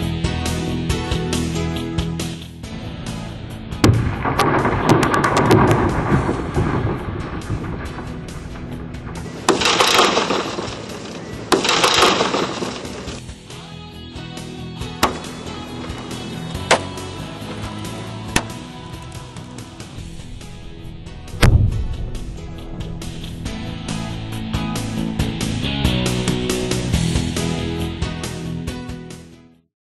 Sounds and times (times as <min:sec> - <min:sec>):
Music: 0:00.0 - 0:29.7.